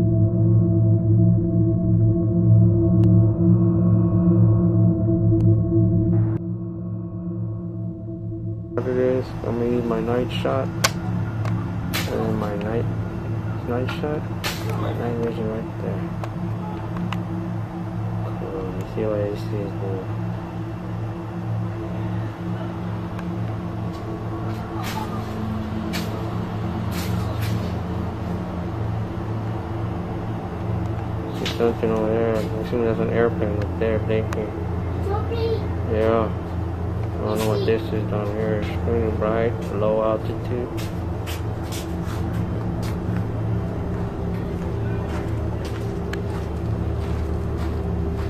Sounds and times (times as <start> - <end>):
Music: 0.0 - 48.3
Speech: 8.8 - 10.7, 12.0 - 12.9, 13.6 - 16.1, 18.3 - 20.1, 31.4 - 34.5, 35.1 - 36.4, 37.2 - 40.8.